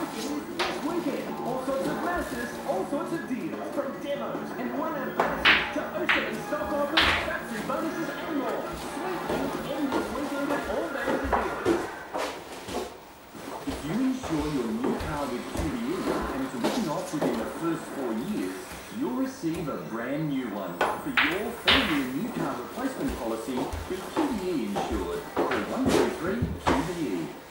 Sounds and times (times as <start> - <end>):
Speech: 0.0 - 11.9, 13.7 - 27.5
Music: 5.7 - 9.0.